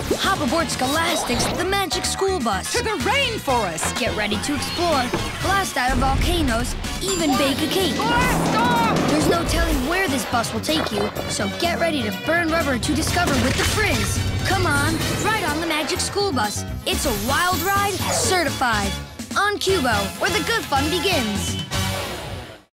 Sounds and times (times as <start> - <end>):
Music: 0.0 - 22.7
Speech: 0.2 - 21.6.